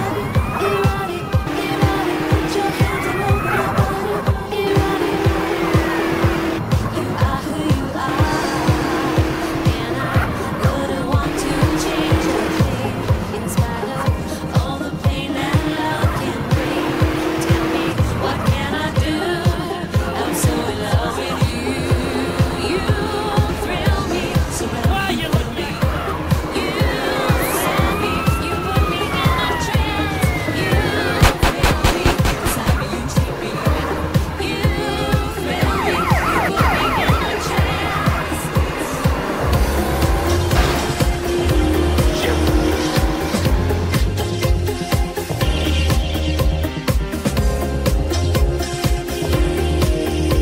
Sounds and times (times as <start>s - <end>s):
Police car (siren): 0.0s - 4.2s, 25.6s - 31.5s, 35.4s - 39.0s.